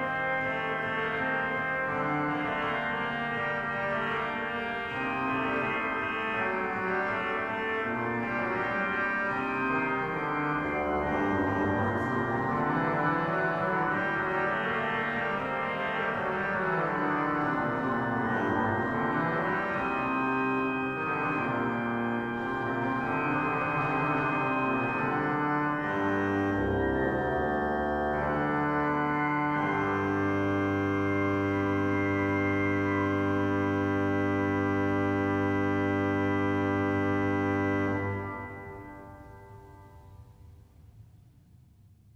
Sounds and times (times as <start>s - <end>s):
Organ: 0.0s - 40.0s
Classical music: 0.0s - 40.4s.